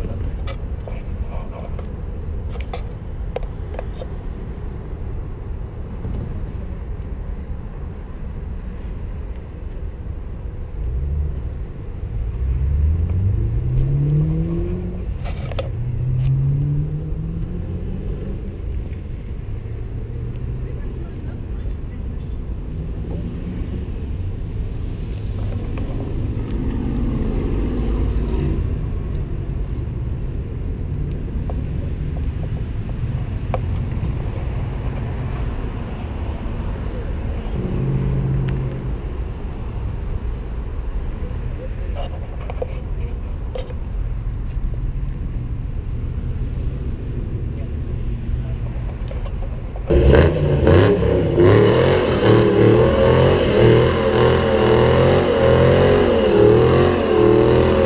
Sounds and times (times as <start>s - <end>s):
Car: 0.0s - 57.8s.